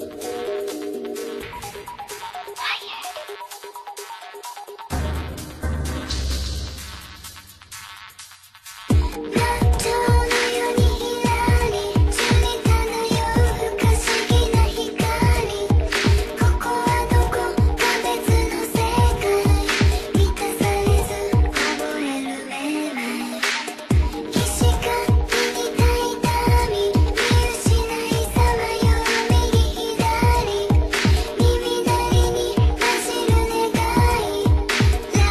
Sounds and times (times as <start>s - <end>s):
Music: 0.0s - 35.3s.